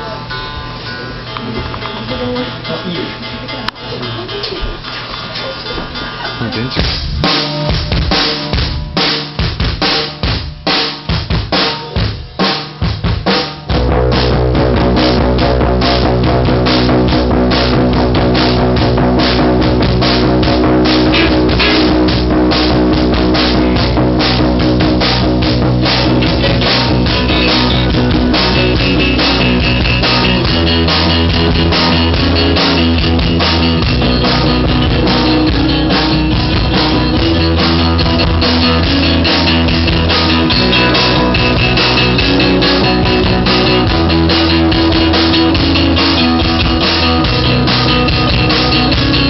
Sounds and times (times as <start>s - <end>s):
Drum kit: 0.0s - 49.2s
Drum roll: 3.8s - 49.2s
Bass drum: 6.7s - 49.2s.